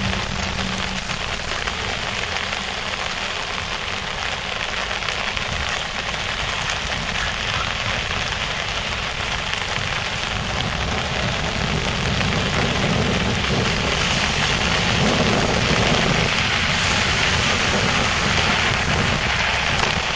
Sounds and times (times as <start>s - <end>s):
Rain on surface: 0.0s - 20.1s.